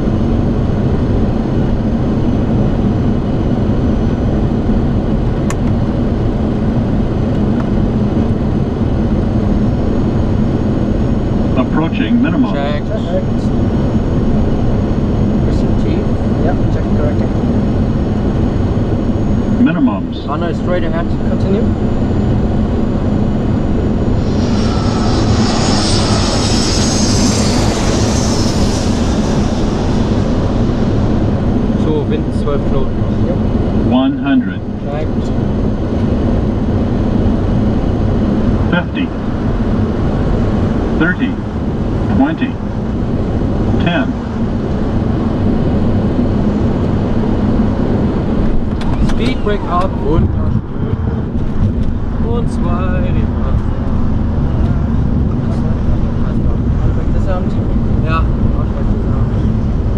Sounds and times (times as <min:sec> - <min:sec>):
Fixed-wing aircraft, airplane: 0:00.0 - 0:59.9.